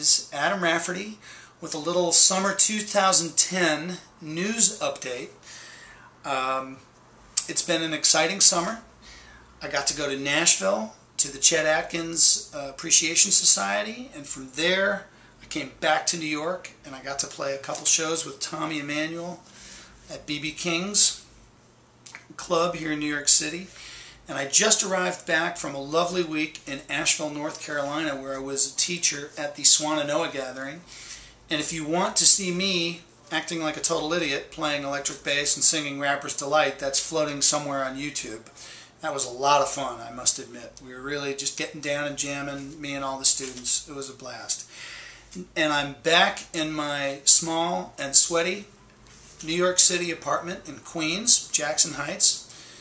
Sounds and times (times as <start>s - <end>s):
Speech: 0.0s - 5.4s, 6.3s - 8.9s, 9.6s - 19.5s, 20.1s - 21.3s, 22.1s - 23.7s, 24.3s - 30.9s, 31.5s - 44.7s, 45.4s - 48.8s, 49.4s - 52.5s.